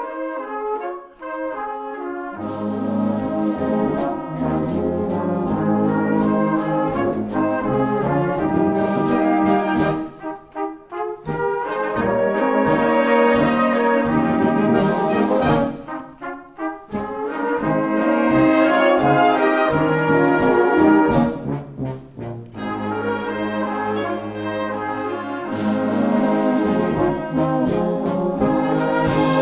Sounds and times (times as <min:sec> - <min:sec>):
Orchestra: 0:00.0 - 0:29.4
Trombone: 0:00.0 - 0:29.4
Trumpet: 0:00.0 - 0:29.4.